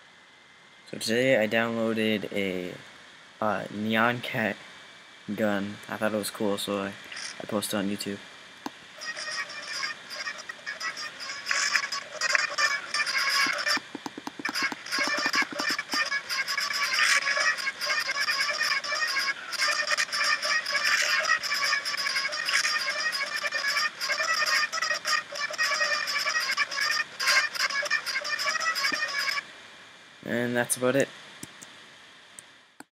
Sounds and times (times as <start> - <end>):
Speech: 0.9 - 2.8, 3.4 - 4.6, 5.3 - 8.2, 30.2 - 31.1.